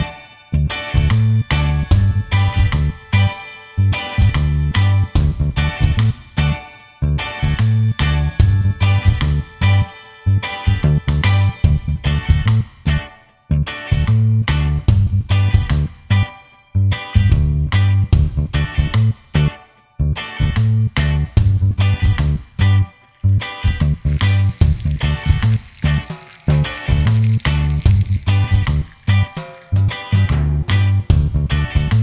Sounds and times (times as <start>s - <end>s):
Music: 0.0s - 32.0s.